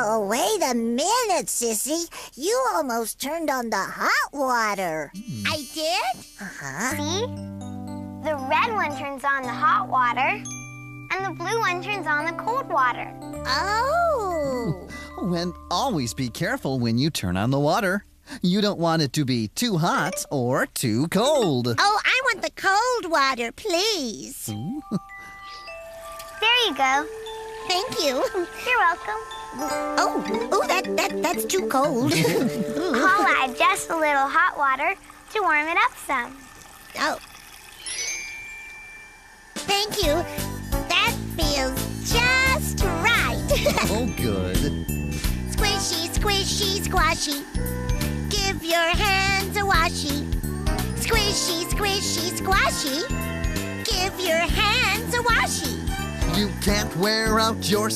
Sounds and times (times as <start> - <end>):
Child speech, kid speaking: 0.0 - 7.3, 8.2 - 10.5, 11.1 - 18.0, 19.9 - 24.5, 26.4 - 27.1, 27.7 - 37.2, 39.7 - 40.3, 40.9 - 44.7, 45.5 - 47.5, 48.3 - 50.3, 51.0 - 53.2, 53.8 - 55.8
Music: 6.8 - 16.9, 24.5 - 34.1, 39.6 - 57.9.